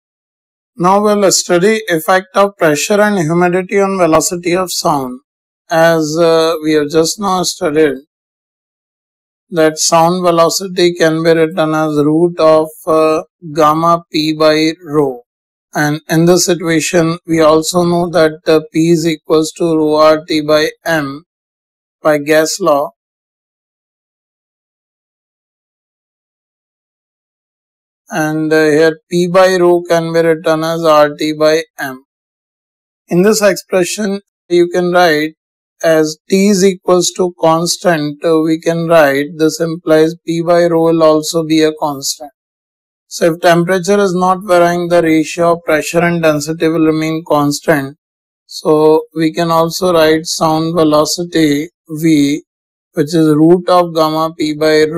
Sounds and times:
Speech: 0.8s - 8.1s, 9.5s - 15.2s, 15.8s - 21.2s, 22.0s - 23.0s, 28.1s - 32.1s, 33.1s - 42.3s, 43.1s - 52.4s, 53.0s - 54.9s.

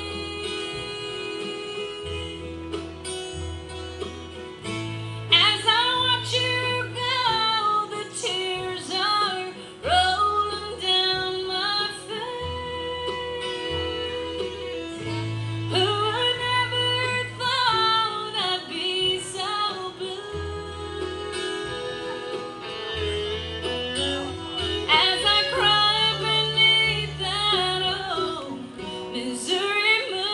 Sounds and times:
Female singing: 0.0s - 2.5s, 5.3s - 23.1s, 24.9s - 30.3s
Country: 0.0s - 30.3s.

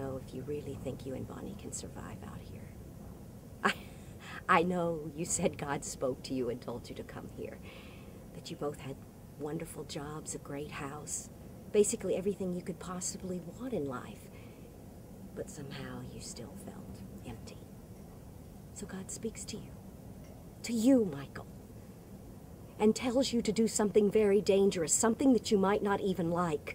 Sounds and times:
Speech: 0.0s - 2.7s, 3.6s - 7.6s, 8.4s - 14.3s, 15.4s - 17.7s, 18.8s - 19.8s, 20.6s - 21.5s, 22.8s - 26.7s.

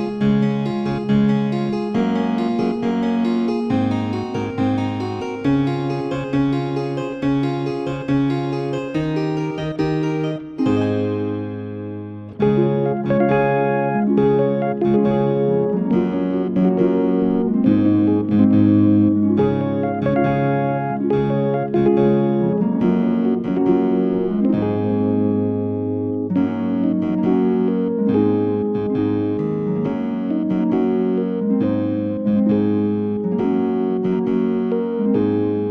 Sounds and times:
Music: 0.0s - 35.7s.

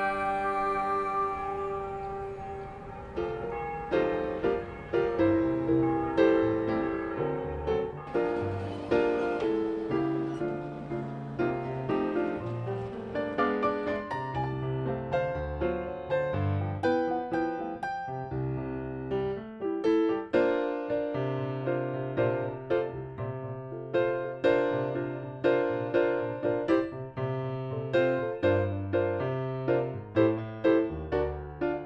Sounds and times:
Classical music: 0.0s - 31.8s
Orchestra: 0.0s - 31.8s.

